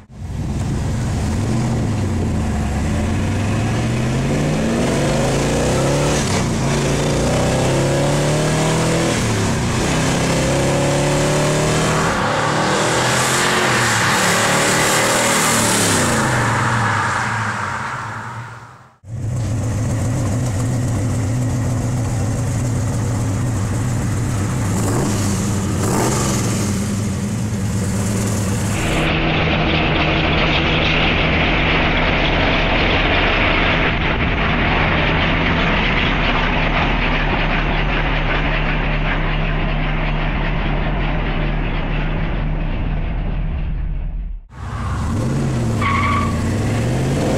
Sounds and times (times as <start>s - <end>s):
Car: 0.0s - 47.3s.